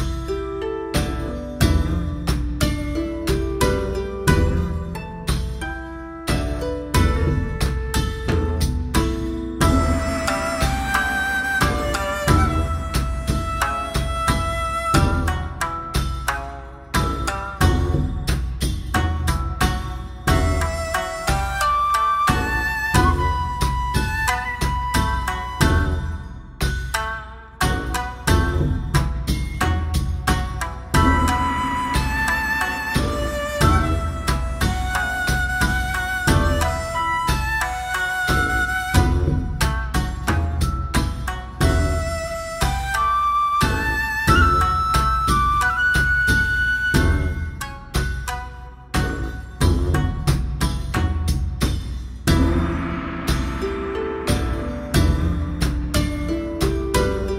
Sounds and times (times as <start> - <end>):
Music: 0.0 - 57.3.